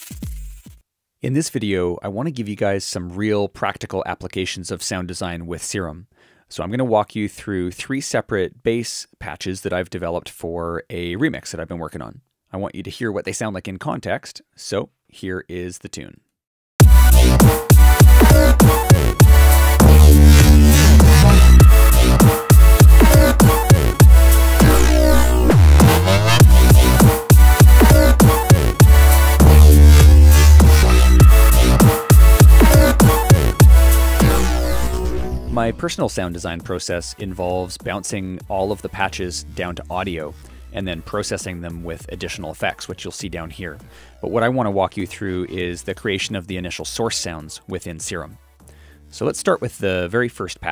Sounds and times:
Music: 0.0 - 0.8, 16.8 - 50.7
Sound effect: 17.2 - 35.8.

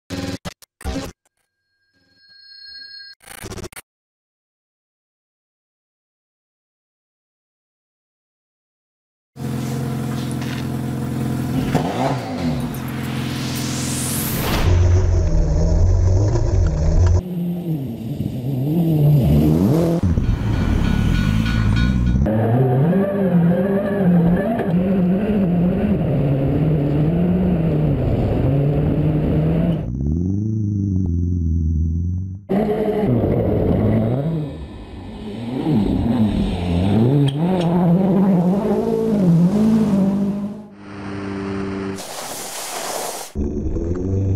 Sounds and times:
Car: 9.4 - 20.9, 22.1 - 42.0
Outside, rural or natural: 9.4 - 44.3.

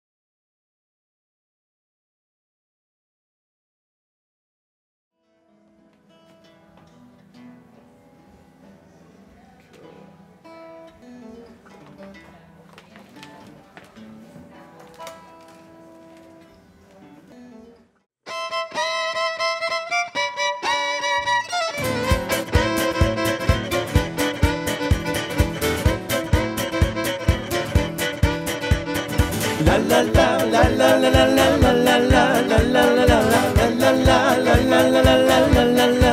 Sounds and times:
Violin, fiddle: 18.3 - 30.4
Singing: 29.5 - 36.1.

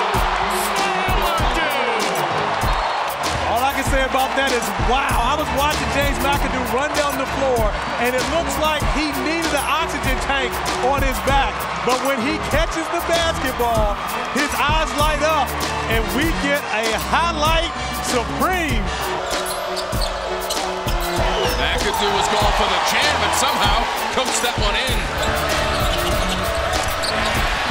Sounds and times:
Shout: 0.0 - 2.9
Music: 0.0 - 27.7
Speech: 0.6 - 2.2, 3.5 - 18.8, 21.4 - 25.0.

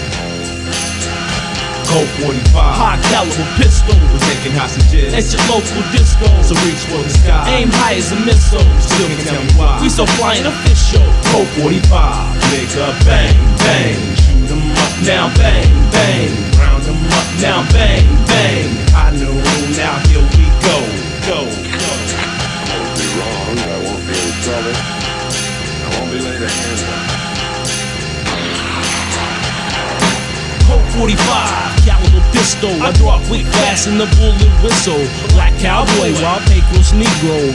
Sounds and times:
Music: 0.0 - 37.5.

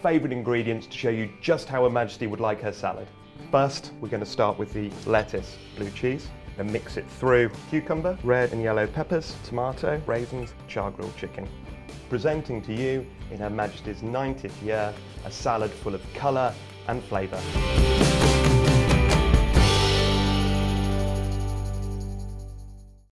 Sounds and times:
Speech: 0.0 - 11.5, 12.1 - 17.5
Music: 0.0 - 23.1.

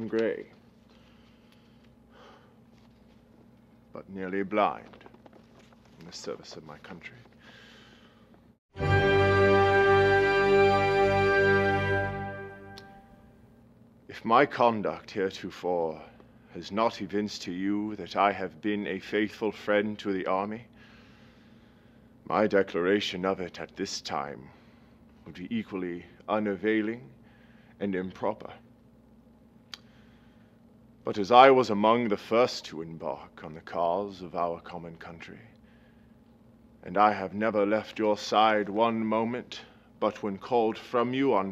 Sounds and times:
Male speech, man speaking: 0.0 - 0.6, 4.0 - 5.0, 6.0 - 7.3, 14.1 - 20.7, 22.3 - 24.5, 25.3 - 27.2, 27.8 - 28.7, 31.1 - 35.6, 36.8 - 41.5.

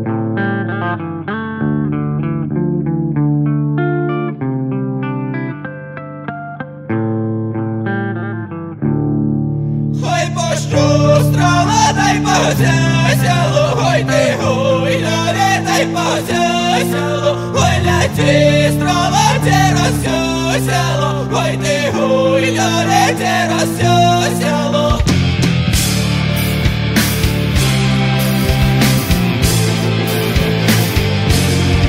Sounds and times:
Music: 0.0 - 31.8.

